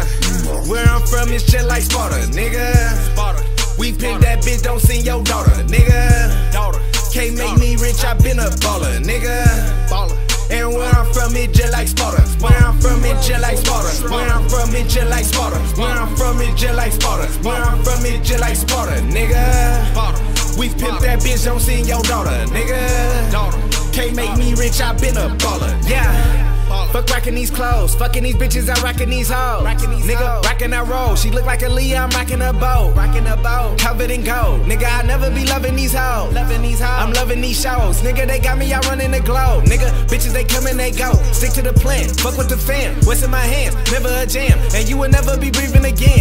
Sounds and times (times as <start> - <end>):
Theme music: 0.0 - 27.1.